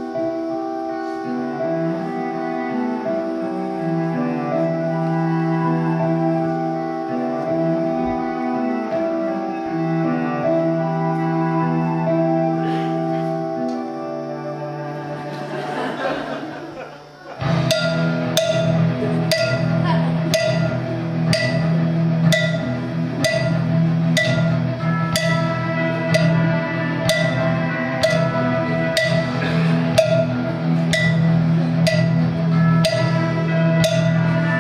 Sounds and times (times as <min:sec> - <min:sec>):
Classical music: 0:00.0 - 0:34.6
Speech: 0:19.8 - 0:20.3.